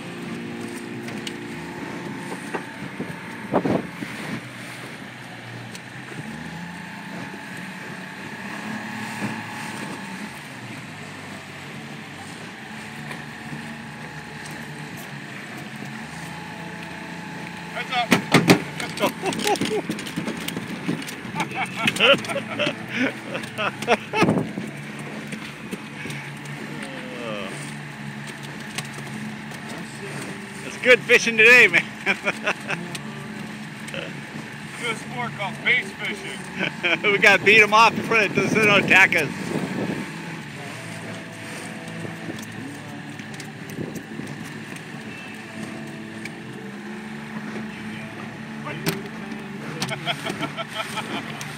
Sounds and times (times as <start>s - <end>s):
Boat, Water vehicle: 0.0s - 51.5s
Outside, rural or natural: 0.0s - 51.5s.